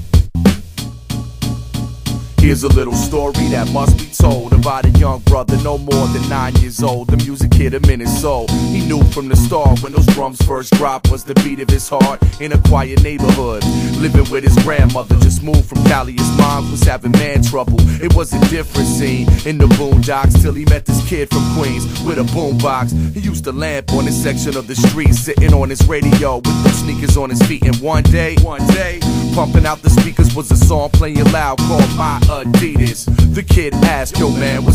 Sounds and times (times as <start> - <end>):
Music: 0.0 - 34.7.